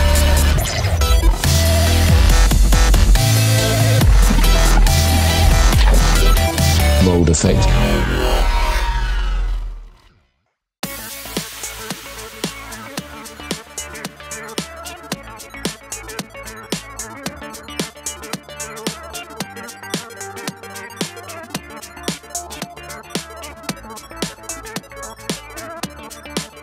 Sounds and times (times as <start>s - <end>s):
Dubstep: 0.0s - 9.0s, 10.9s - 26.6s.